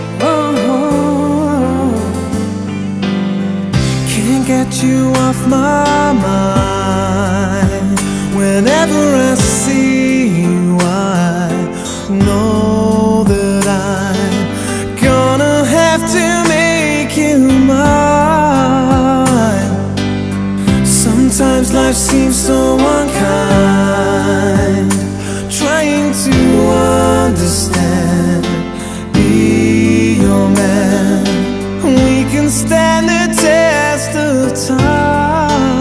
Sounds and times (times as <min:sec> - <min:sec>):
Music: 0:00.0 - 0:35.8.